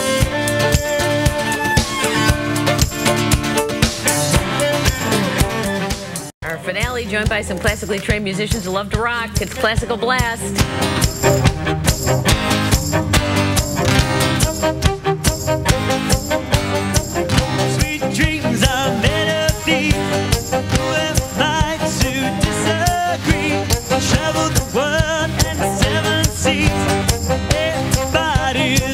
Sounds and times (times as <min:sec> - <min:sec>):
Music: 0:00.0 - 0:28.9
Speech: 0:06.4 - 0:10.6.